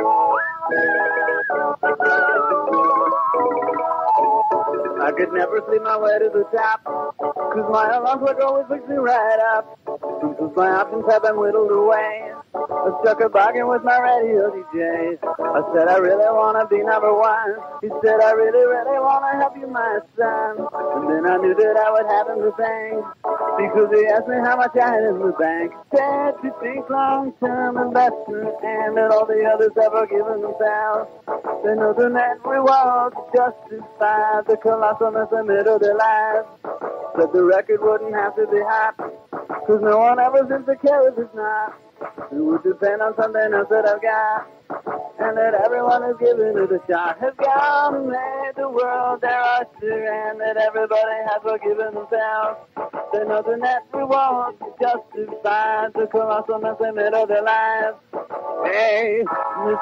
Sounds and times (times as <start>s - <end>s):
Music: 0.0s - 59.8s.